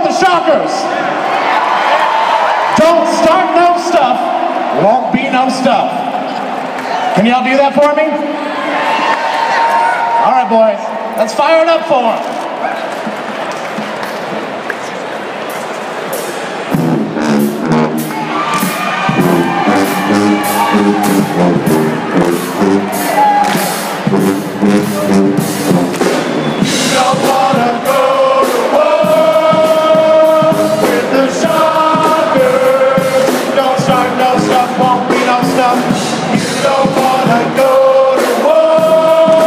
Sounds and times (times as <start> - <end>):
Music: 12.3 - 39.4.